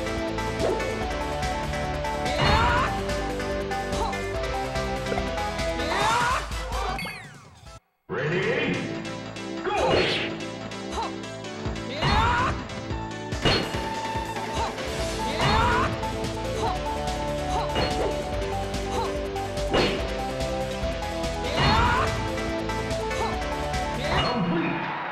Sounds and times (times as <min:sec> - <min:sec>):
Music: 0:00.0 - 0:25.1.